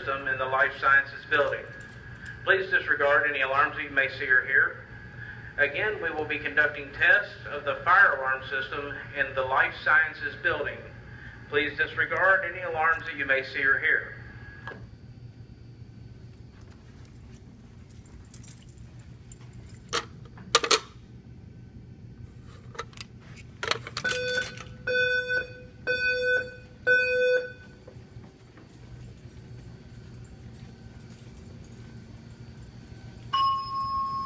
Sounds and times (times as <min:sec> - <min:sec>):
Speech: 0:00.0 - 0:01.8, 0:02.5 - 0:04.8, 0:05.6 - 0:10.9, 0:11.5 - 0:14.2.